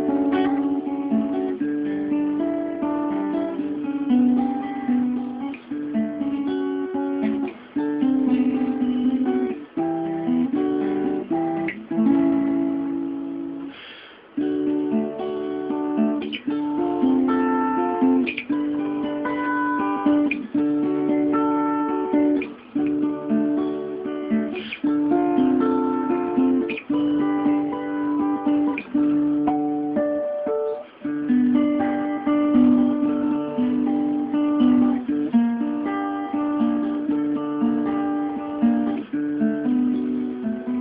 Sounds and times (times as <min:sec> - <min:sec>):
Strum: 0:00.0 - 0:40.8.